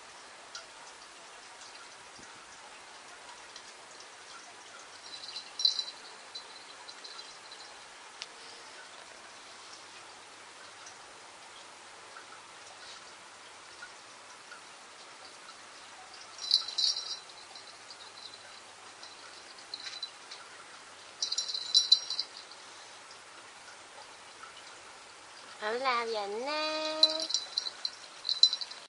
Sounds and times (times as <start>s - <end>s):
Speech: 25.6s - 27.3s.